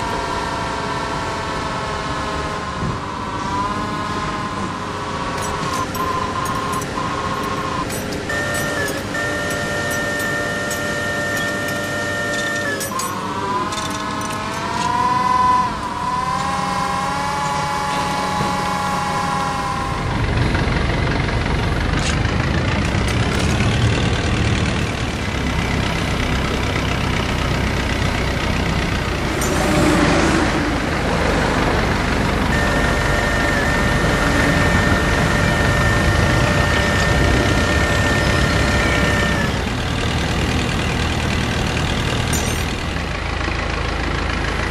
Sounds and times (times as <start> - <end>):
Vehicle: 0.0 - 44.7.